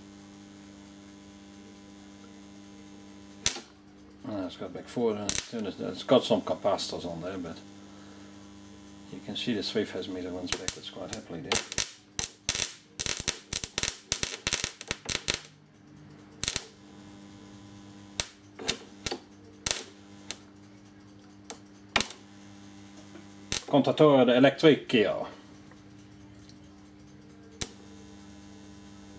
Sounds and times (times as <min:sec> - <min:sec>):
Speech: 0:04.2 - 0:07.6, 0:09.1 - 0:11.6, 0:23.7 - 0:25.4.